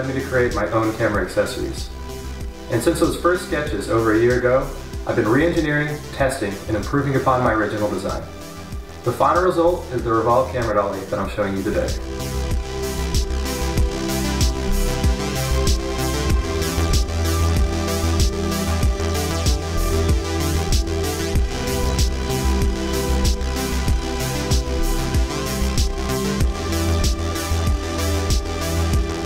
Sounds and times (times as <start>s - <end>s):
Speech: 0.0s - 1.9s, 2.7s - 8.3s, 9.1s - 12.0s
Music: 0.0s - 29.2s.